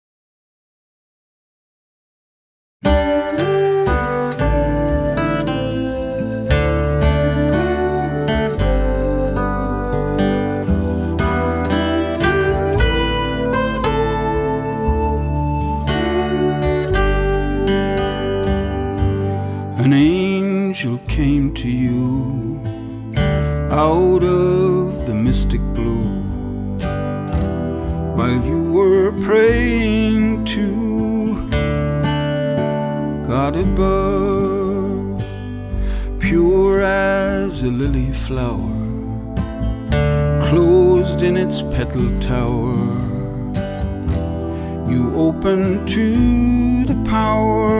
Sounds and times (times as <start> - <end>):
Music: 2.8 - 47.7.